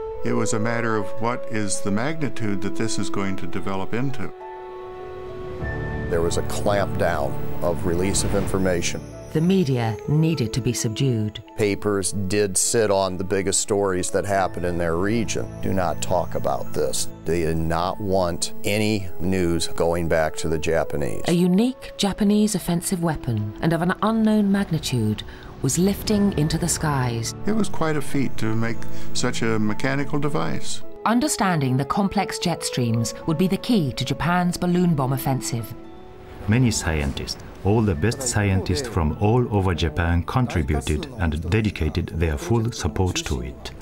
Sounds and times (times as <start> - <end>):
Music: 0.0 - 43.8
Speech: 0.3 - 4.3, 6.1 - 32.4, 36.5 - 43.8.